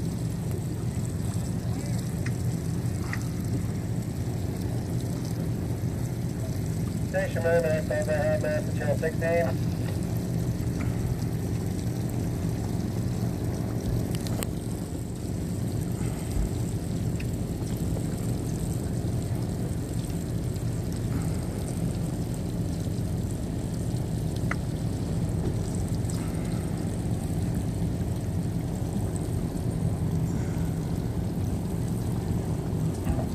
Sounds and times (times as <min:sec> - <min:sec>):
Fire: 0:00.0 - 0:33.3
Wind: 0:00.0 - 0:33.3.